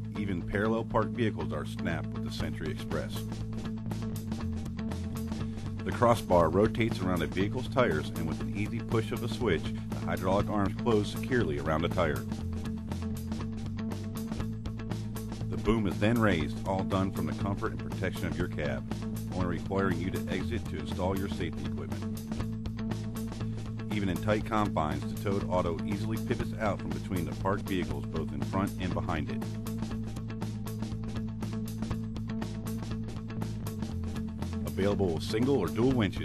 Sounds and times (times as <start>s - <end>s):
Music: 0.0s - 36.2s
Speech: 0.2s - 3.2s, 5.8s - 12.3s, 15.5s - 22.0s, 23.9s - 29.4s, 34.6s - 36.2s.